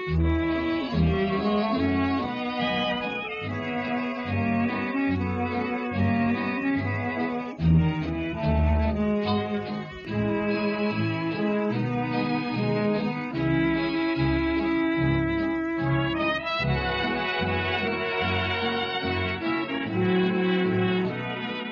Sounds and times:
String section: 0.0 - 21.7.

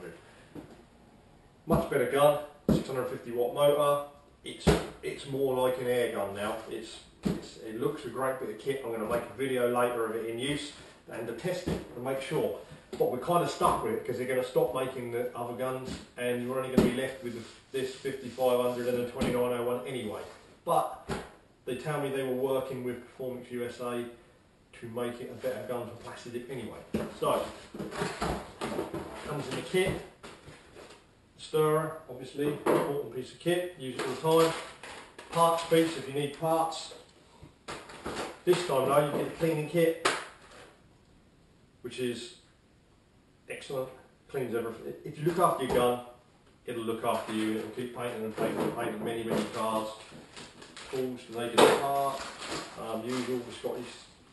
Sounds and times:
Speech: 1.7 - 21.0, 21.6 - 27.6, 29.2 - 30.1, 31.4 - 34.7, 35.3 - 37.0, 38.4 - 40.0, 41.8 - 42.5, 43.5 - 50.1, 50.8 - 54.2.

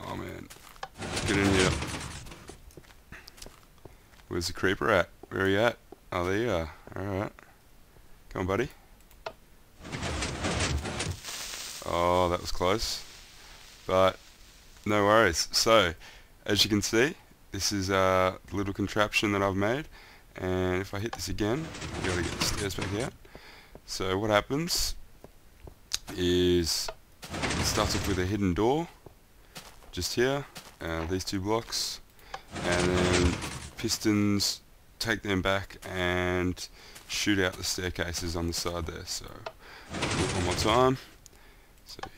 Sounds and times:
Speech: 0.0 - 1.9, 4.3 - 7.4, 8.3 - 8.8, 11.8 - 13.0, 13.9 - 14.2, 14.8 - 23.2, 23.9 - 25.0, 26.0 - 29.0, 29.9 - 41.2, 41.8 - 42.1.

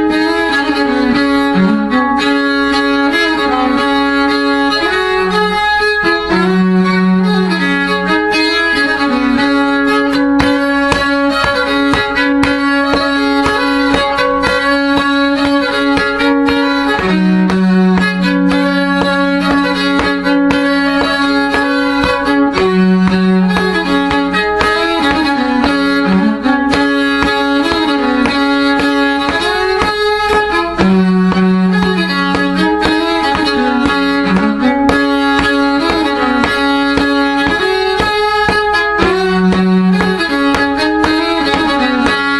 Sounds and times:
Violin, fiddle: 0.0 - 42.4.

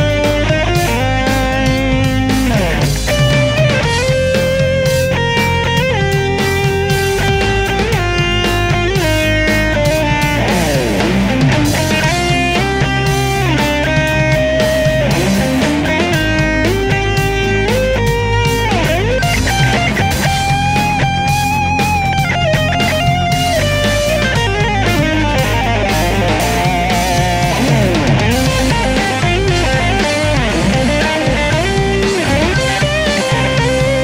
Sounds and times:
Electric guitar: 0.0 - 34.0
Strum: 0.0 - 34.0.

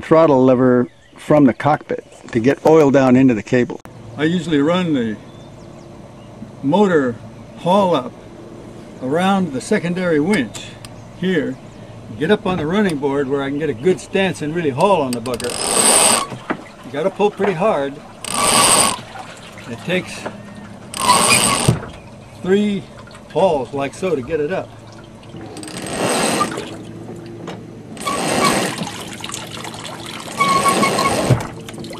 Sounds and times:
Speech: 0.0 - 5.2, 6.5 - 8.1, 9.0 - 15.6, 16.9 - 18.0, 19.7 - 20.3, 22.4 - 24.7
Boat, Water vehicle: 0.0 - 31.9
Outside, rural or natural: 0.0 - 31.9.

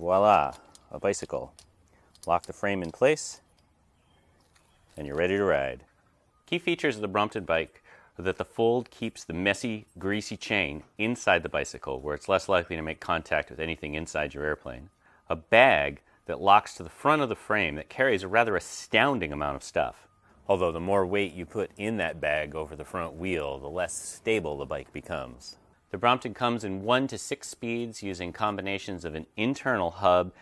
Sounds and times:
Speech: 0.0 - 1.5, 2.3 - 3.4, 5.0 - 5.9, 6.5 - 30.4.

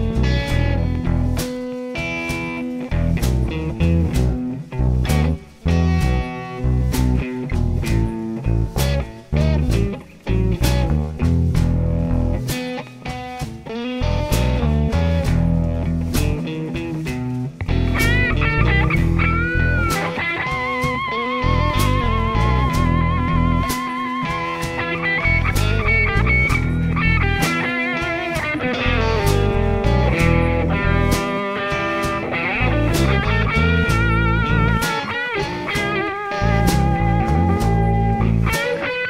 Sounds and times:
Acoustic guitar: 0.0 - 39.1
Electric guitar: 0.0 - 39.1.

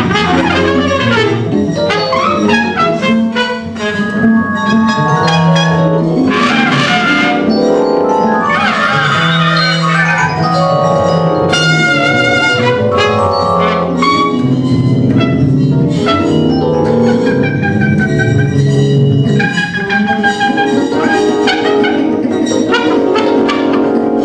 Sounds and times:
Trumpet: 0.0 - 10.7, 11.4 - 24.2.

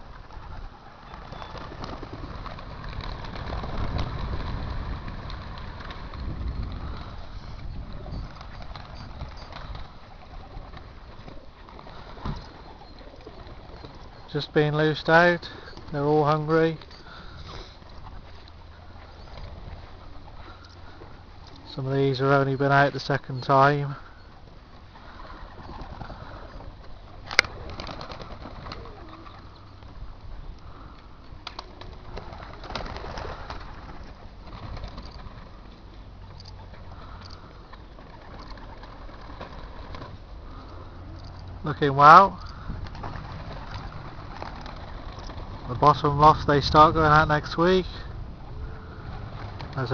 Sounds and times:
Pigeon, dove: 0.0 - 14.7, 16.8 - 21.7, 23.4 - 41.6, 42.4 - 45.7
Speech: 14.3 - 16.8, 21.7 - 24.0, 41.6 - 42.4, 45.7 - 48.1.

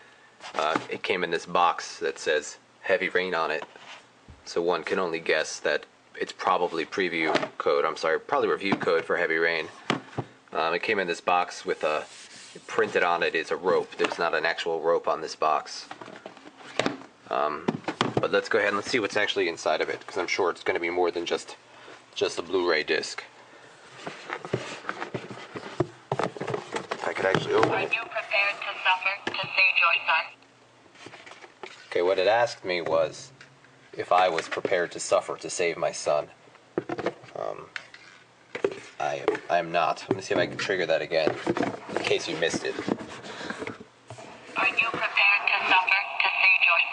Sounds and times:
Speech: 0.6 - 3.6, 4.5 - 9.8, 10.5 - 15.9, 17.3 - 21.6, 22.2 - 23.3, 27.0 - 30.4, 31.9 - 33.3, 34.0 - 36.3, 37.3 - 37.8, 39.0 - 41.4, 42.0 - 42.8, 44.6 - 46.9.

